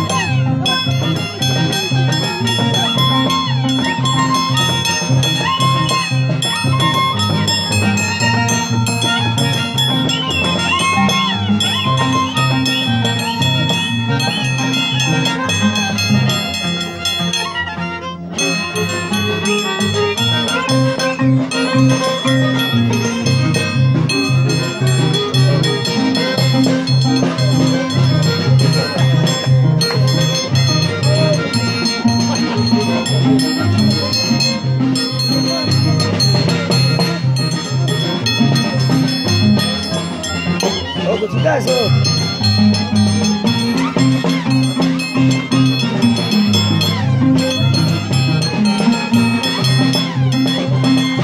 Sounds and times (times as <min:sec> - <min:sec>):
Violin, fiddle: 0:00.0 - 0:51.2.